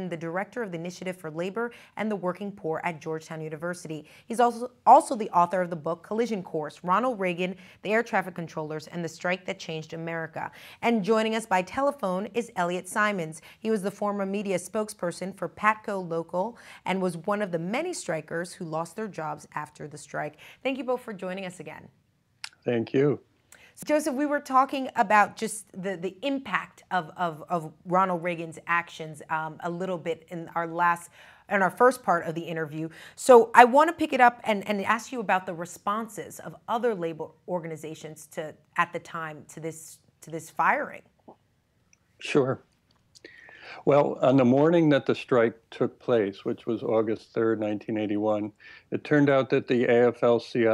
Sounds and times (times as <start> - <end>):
Speech: 22.5 - 23.2, 42.2 - 42.6, 43.7 - 50.7.